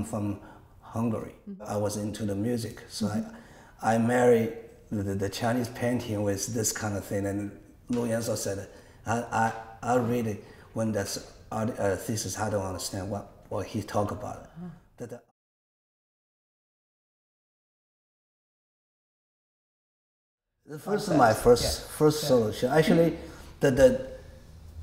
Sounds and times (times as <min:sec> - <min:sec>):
Speech: 0:00.0 - 0:15.3, 0:20.7 - 0:24.2.